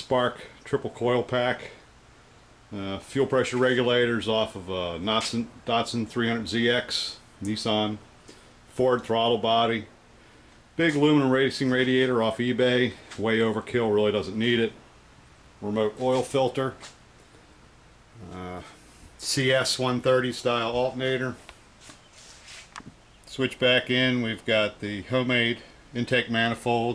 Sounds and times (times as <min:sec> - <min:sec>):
Speech: 0:00.0 - 0:01.8, 0:02.7 - 0:08.0, 0:08.7 - 0:09.9, 0:10.8 - 0:14.8, 0:15.6 - 0:16.8, 0:18.2 - 0:21.4, 0:23.3 - 0:26.9.